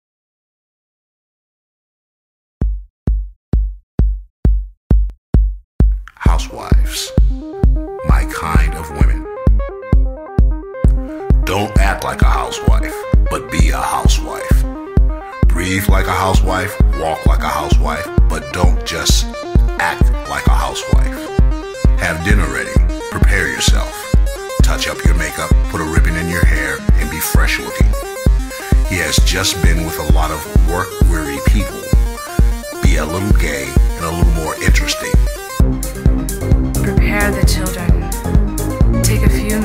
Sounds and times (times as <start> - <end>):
Music: 2.6 - 39.6
Speech: 6.1 - 7.2, 8.0 - 9.2, 11.4 - 14.6, 15.4 - 21.3, 22.0 - 24.0, 24.6 - 28.0, 28.9 - 32.0, 32.8 - 35.2, 36.8 - 38.1, 39.0 - 39.6.